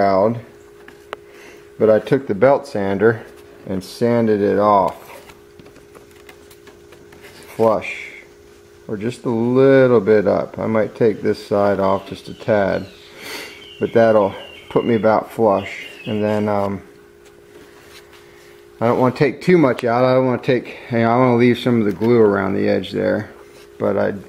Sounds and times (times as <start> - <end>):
Speech: 0.0 - 0.5, 1.8 - 5.2, 7.5 - 8.3, 8.9 - 12.9, 13.8 - 16.9, 18.8 - 24.2.